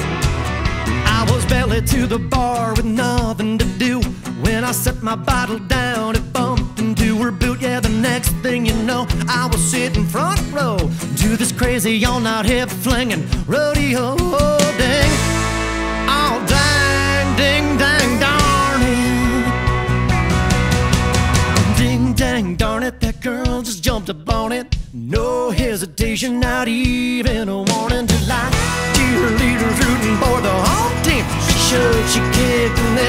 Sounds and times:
Music: 0.0 - 33.0.

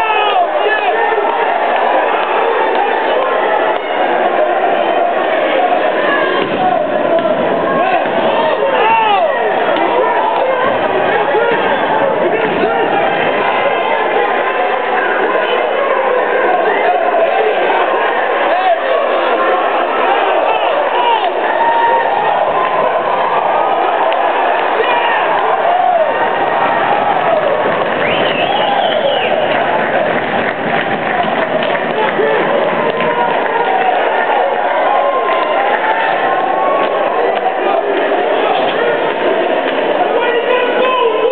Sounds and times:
Speech: 0.0 - 25.9, 31.6 - 41.3.

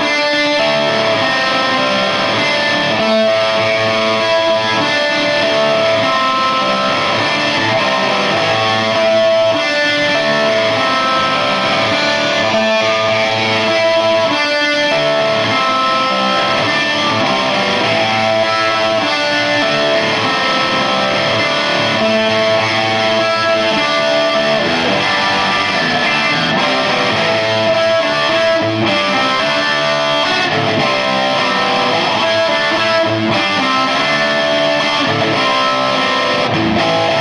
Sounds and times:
Electric guitar: 0.0 - 37.2.

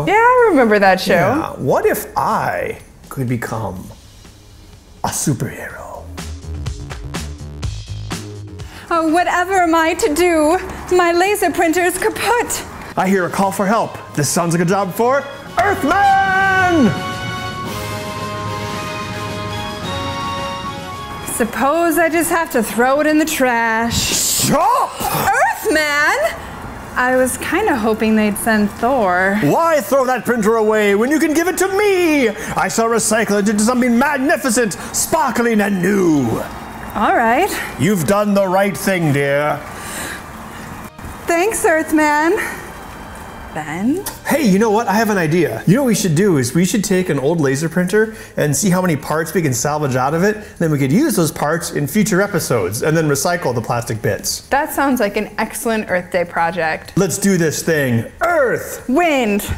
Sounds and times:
Music: 0.0 - 24.1, 28.7 - 38.9, 40.9 - 50.2.

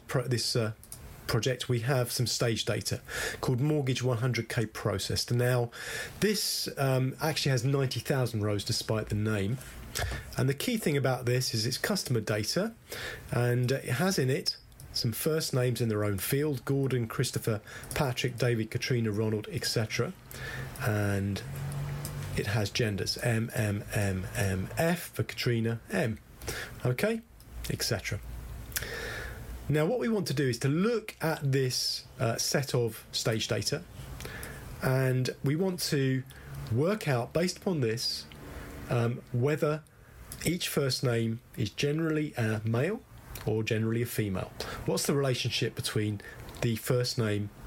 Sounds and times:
Speech: 0.0 - 9.6, 10.4 - 20.2, 20.8 - 21.5, 22.4 - 26.2, 26.8 - 28.3, 29.7 - 33.9, 34.8 - 38.3, 38.9 - 47.6.

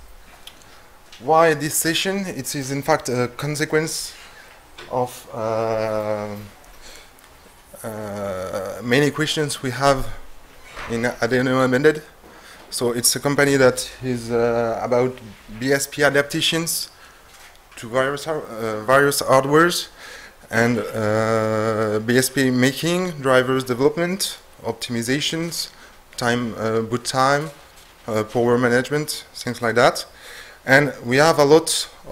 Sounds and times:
Speech: 1.2 - 4.2, 4.9 - 6.6, 7.8 - 10.2, 10.8 - 17.0, 17.8 - 32.1.

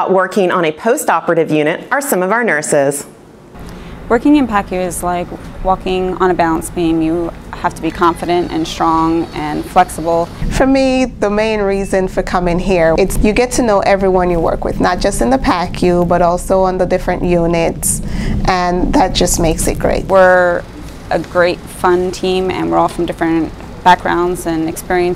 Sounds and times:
Speech: 0.0 - 3.1, 4.1 - 25.1.

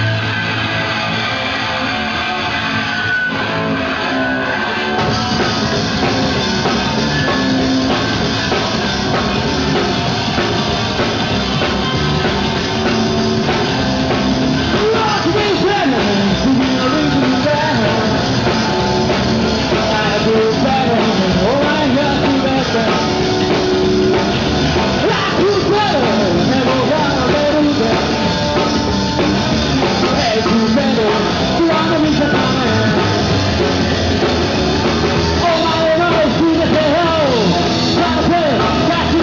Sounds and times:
Music: 0.0 - 39.2.

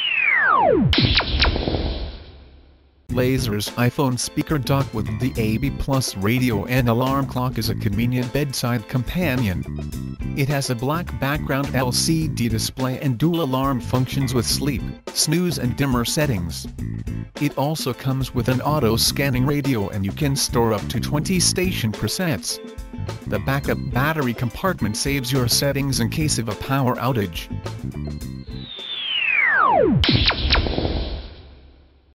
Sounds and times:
Speech: 3.1 - 9.7, 10.4 - 16.7, 17.4 - 22.6, 23.3 - 27.6
Music: 3.1 - 29.0.

